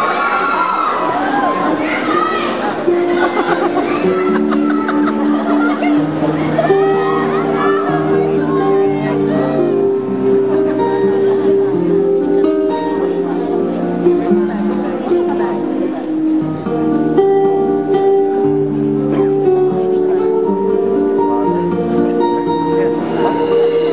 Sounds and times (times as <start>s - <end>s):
Music: 0.4s - 23.9s
Speech: 1.1s - 9.9s, 10.6s - 16.4s.